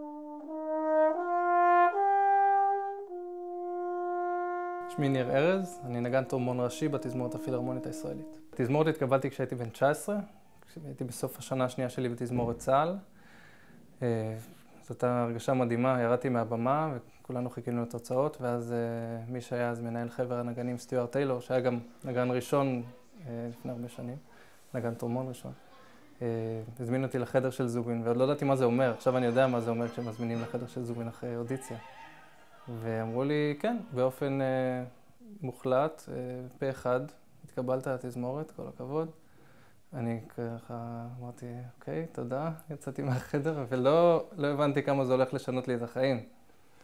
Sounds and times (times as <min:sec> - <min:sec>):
Trumpet: 0:00.0 - 0:09.0.